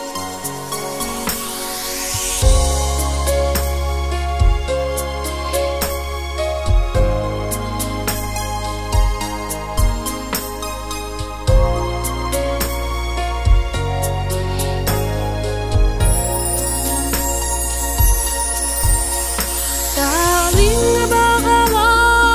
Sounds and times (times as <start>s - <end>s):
Theme music: 0.0s - 21.8s.